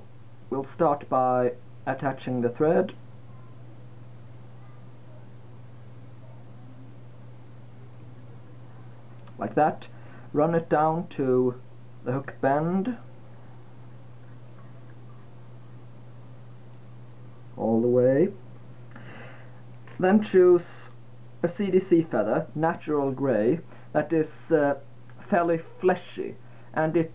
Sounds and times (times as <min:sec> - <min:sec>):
Speech: 0:00.5 - 0:03.0, 0:08.8 - 0:13.1, 0:17.6 - 0:18.4, 0:19.9 - 0:27.1.